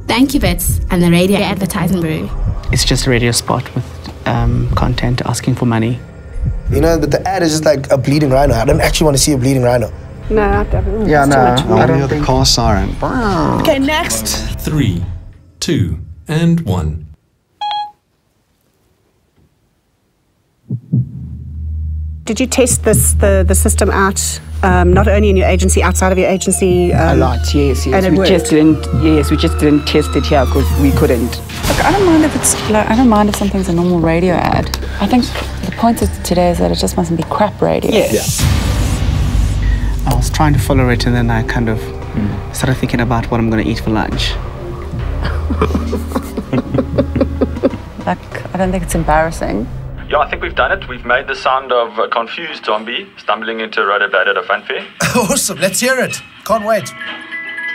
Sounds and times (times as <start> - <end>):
Music: 0.0 - 16.5, 20.9 - 57.7
Speech: 10.3 - 12.9.